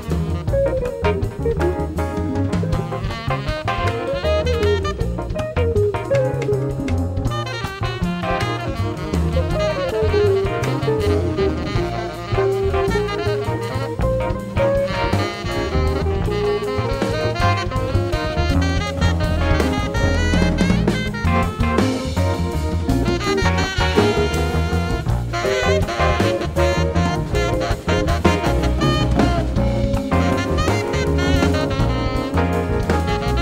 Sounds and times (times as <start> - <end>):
Jazz: 0.0 - 33.4
Saxophone: 0.0 - 33.4.